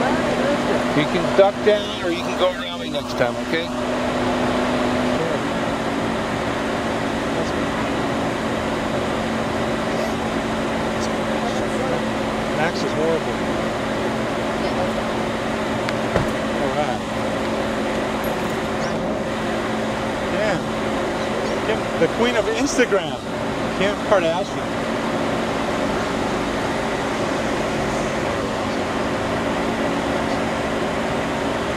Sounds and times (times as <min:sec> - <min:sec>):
Car: 0:00.0 - 0:31.7
Outside, urban or manmade: 0:00.0 - 0:31.7.